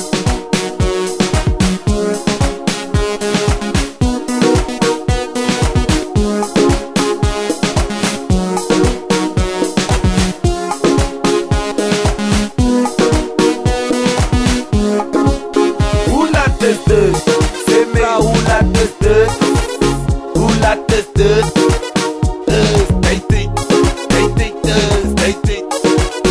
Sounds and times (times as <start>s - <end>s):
Music: 0.0s - 26.3s.